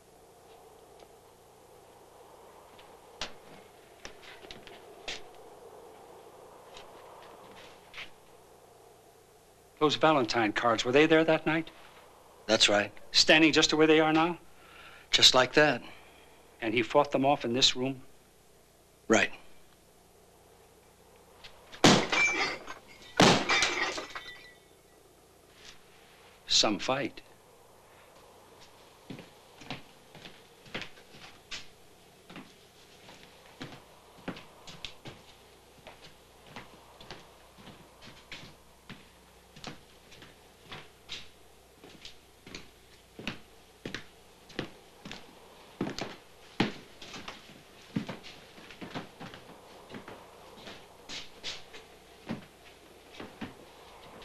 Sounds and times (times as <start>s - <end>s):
Speech: 9.8s - 11.8s, 12.5s - 14.4s, 15.1s - 16.0s, 16.6s - 18.1s, 19.1s - 19.5s, 26.5s - 27.3s.